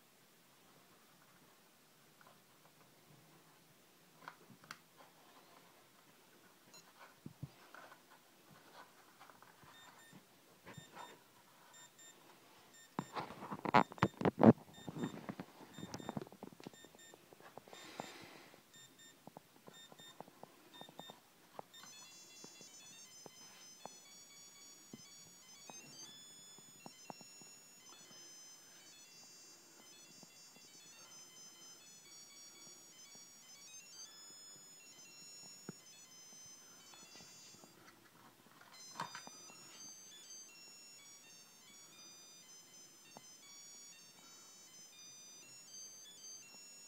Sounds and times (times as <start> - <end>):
Alarm: 9.7 - 17.2, 17.8 - 37.9, 38.7 - 46.8.